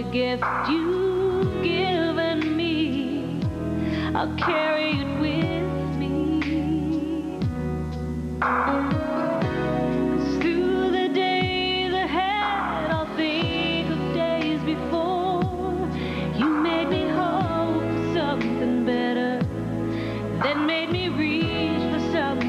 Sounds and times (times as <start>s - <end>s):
Tender music: 0.0s - 22.4s.